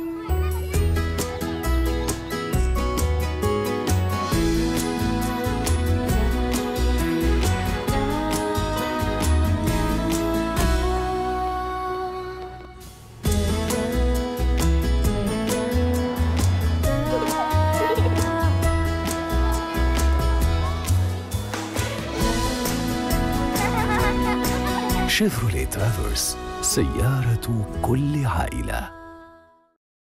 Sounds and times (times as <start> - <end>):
Music: 0.0 - 29.8
Speech: 25.1 - 29.0.